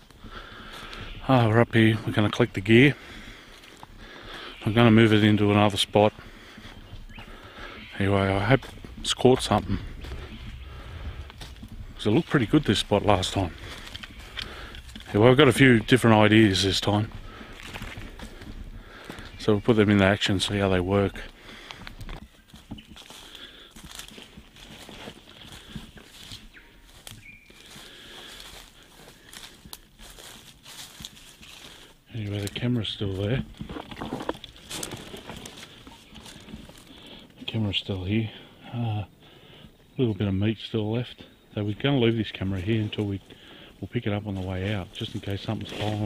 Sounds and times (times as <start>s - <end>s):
Speech: 1.2s - 3.0s, 4.6s - 6.2s, 7.9s - 9.9s, 12.0s - 13.6s, 15.0s - 17.1s, 19.4s - 21.3s, 32.1s - 33.5s, 37.4s - 39.1s, 40.0s - 46.0s.